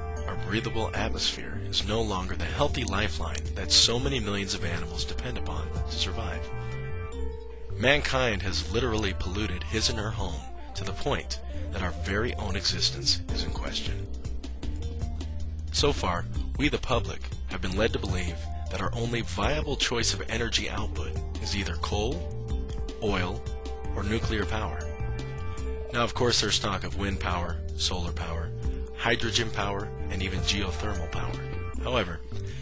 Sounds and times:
Music: 0.0 - 32.6
Speech: 0.3 - 6.5, 7.8 - 14.1, 15.8 - 22.3, 23.0 - 24.9, 25.9 - 32.3.

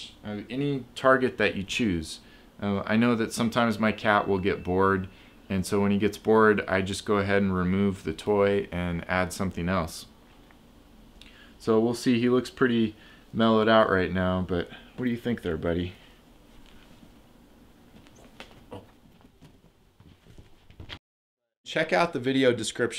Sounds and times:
Speech: 0.0 - 10.1, 11.6 - 16.0, 21.7 - 22.9.

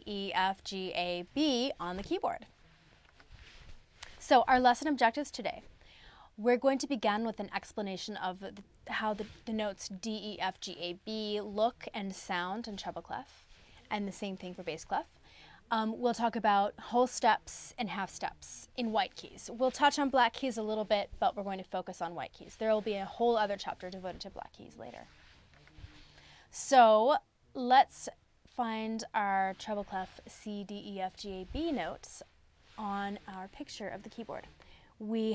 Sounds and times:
Speech: 0.0 - 2.5, 4.1 - 5.7, 6.4 - 13.3, 13.9 - 15.1, 15.7 - 25.1, 26.5 - 35.3.

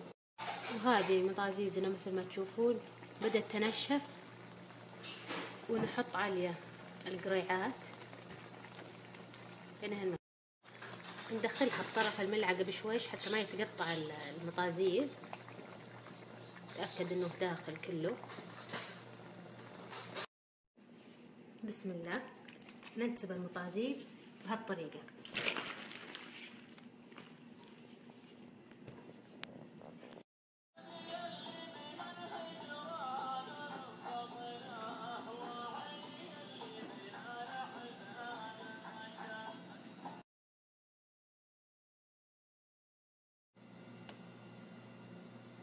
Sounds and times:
Speech: 0.7 - 4.1, 5.7 - 7.8, 9.8 - 10.2, 11.3 - 15.1, 16.8 - 18.2, 21.6 - 25.1.

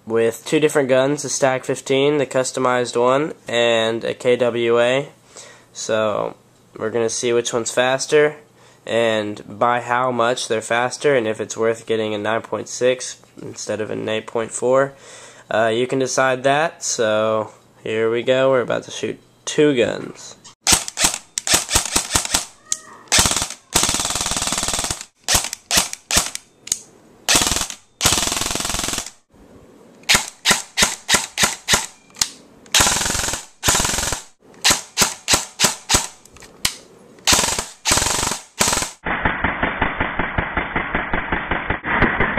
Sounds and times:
Machine gun: 20.7 - 26.4, 27.3 - 29.2, 32.8 - 36.2, 37.3 - 42.3.

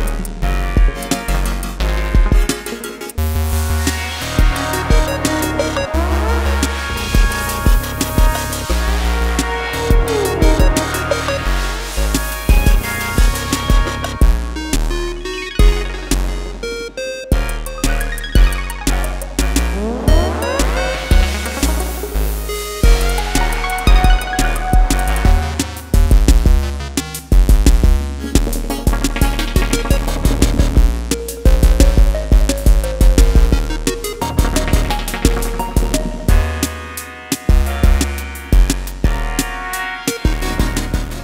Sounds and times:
Drum machine: 0.0 - 36.8, 37.4 - 41.2.

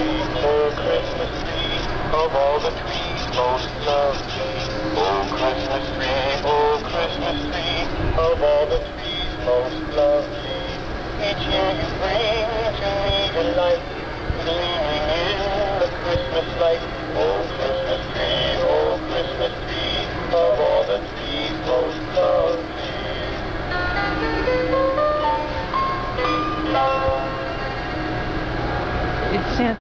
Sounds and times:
Music: 0.0 - 29.5
Speech: 29.3 - 29.8.

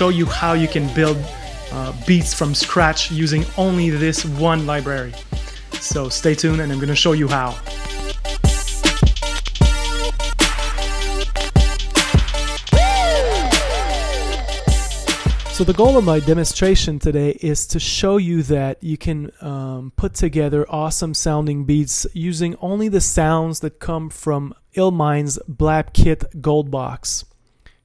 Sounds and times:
Speech: 0.0 - 5.2, 5.8 - 7.6, 15.6 - 27.3
Music: 0.0 - 16.8.

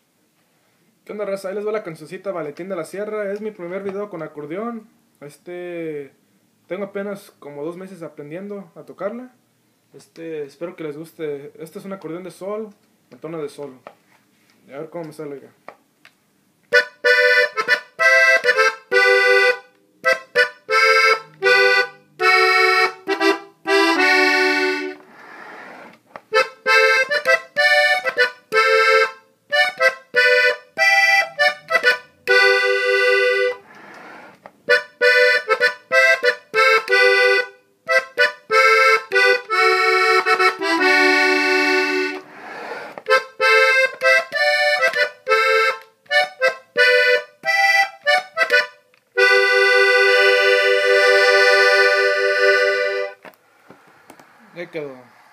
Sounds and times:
Accordion: 16.7 - 55.3.

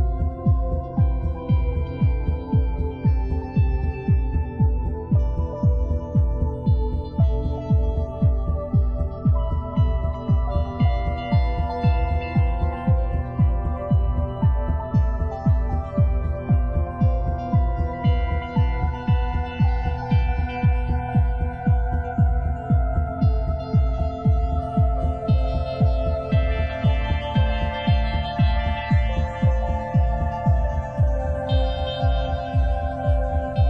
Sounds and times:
Ambient music: 0.0 - 33.6
Electronica: 0.0 - 33.6.

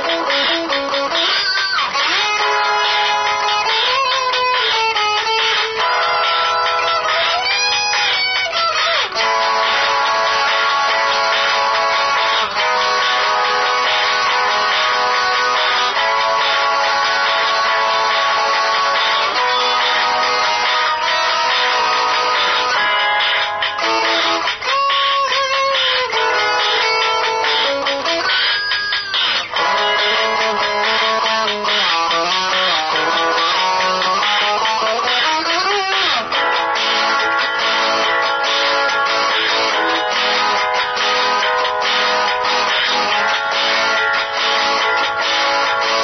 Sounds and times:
Electric guitar: 0.0 - 46.0
Strum: 0.0 - 46.0.

